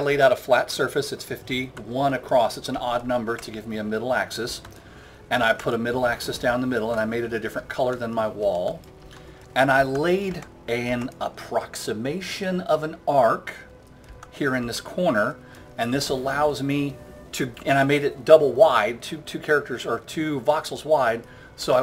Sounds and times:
Speech: 0:00.0 - 0:04.6, 0:05.3 - 0:08.8, 0:09.6 - 0:13.7, 0:14.4 - 0:21.8
Music: 0:00.0 - 0:21.8.

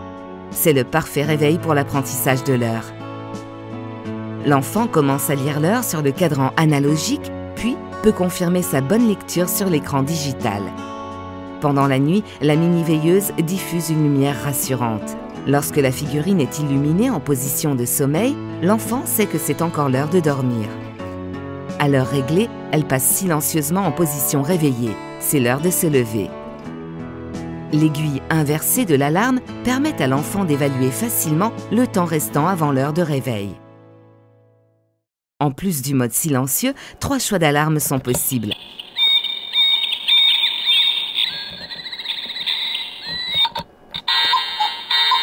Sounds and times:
Music: 0:00.0 - 0:36.1, 0:36.8 - 0:45.2
Speech: 0:00.6 - 0:02.9, 0:04.4 - 0:10.8, 0:11.6 - 0:20.8, 0:21.8 - 0:26.3, 0:27.7 - 0:33.6, 0:35.4 - 0:38.6.

